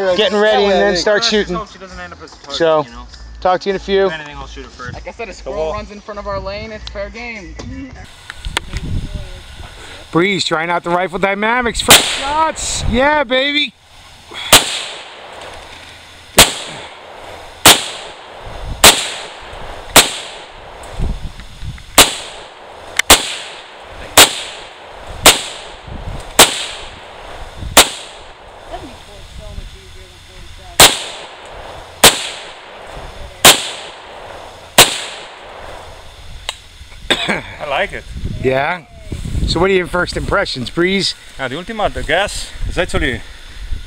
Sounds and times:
Outside, rural or natural: 0.0 - 43.8
Speech: 37.6 - 43.2.

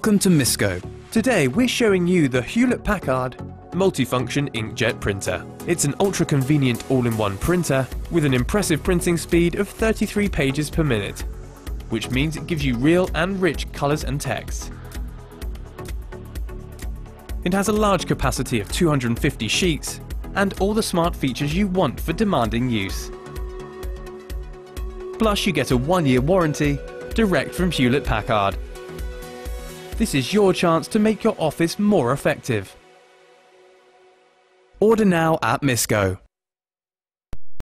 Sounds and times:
Speech: 0.0 - 11.2, 11.9 - 14.7, 17.4 - 23.2, 25.2 - 28.6, 30.0 - 32.8, 34.8 - 36.3
Music: 0.0 - 36.2.

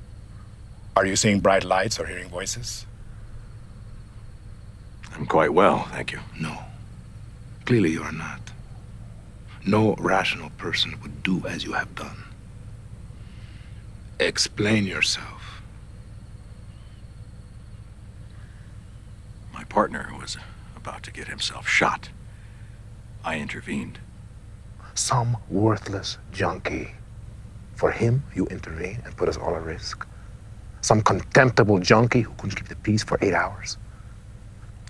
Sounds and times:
Speech: 1.0 - 2.9, 5.1 - 6.7, 7.6 - 8.5, 9.6 - 12.3, 14.2 - 15.6, 19.6 - 22.1, 23.3 - 24.0, 24.9 - 27.0, 27.8 - 30.0, 30.8 - 33.8.

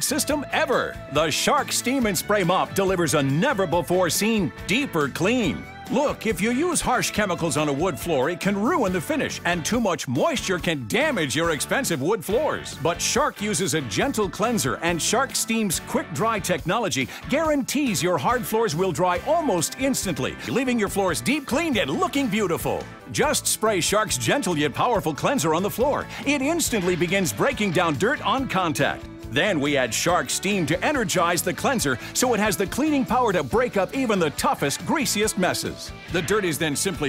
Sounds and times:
Music: 0.0 - 37.0
Speech: 0.0 - 37.0.

